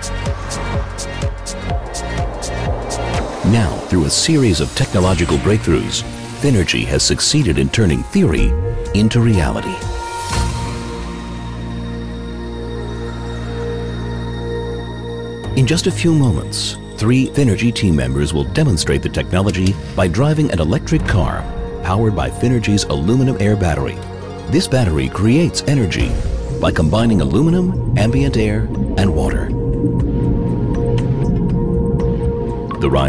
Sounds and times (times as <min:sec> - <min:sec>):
Music: 0:00.0 - 0:33.0
Speech: 0:03.4 - 0:09.8, 0:15.6 - 0:29.6, 0:32.7 - 0:33.0.